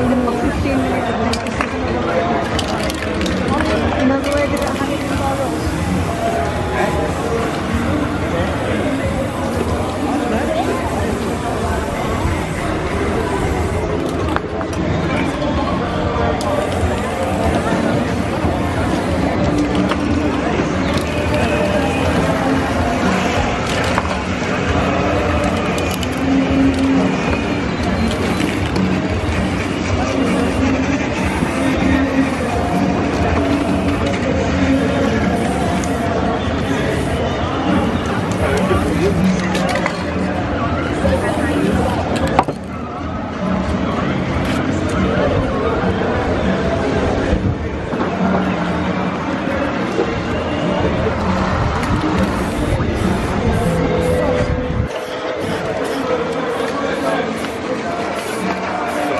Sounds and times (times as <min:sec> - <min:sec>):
Spray: 0:00.0 - 0:01.6, 0:02.5 - 0:14.3, 0:16.4 - 0:24.2, 0:27.8 - 0:40.0, 0:41.0 - 0:42.5, 0:51.9 - 0:59.1.